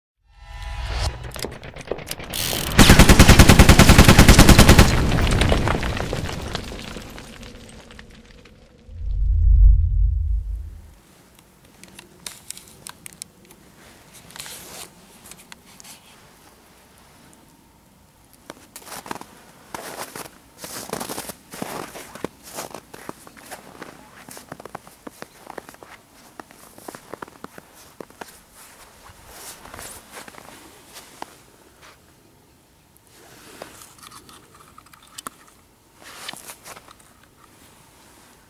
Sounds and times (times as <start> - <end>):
Boom: 8.9 - 10.9.